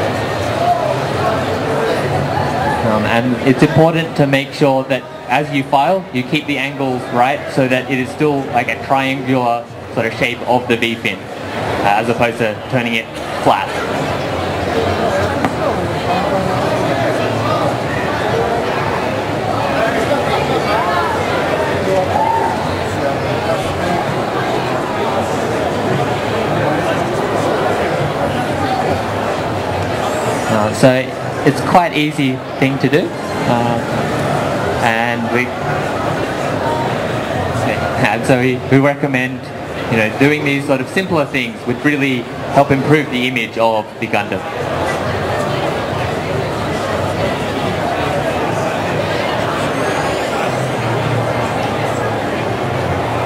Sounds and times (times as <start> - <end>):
Speech: 0.0 - 14.0, 30.0 - 34.0, 34.8 - 35.7, 36.5 - 52.6
Crowd: 0.0 - 53.2
Inside, public space: 0.0 - 53.2.